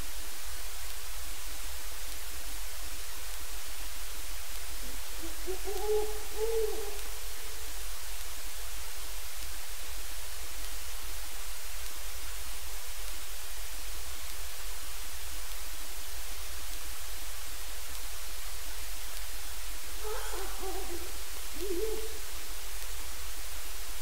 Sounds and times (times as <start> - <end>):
Owl: 5.0 - 7.6, 20.0 - 22.5.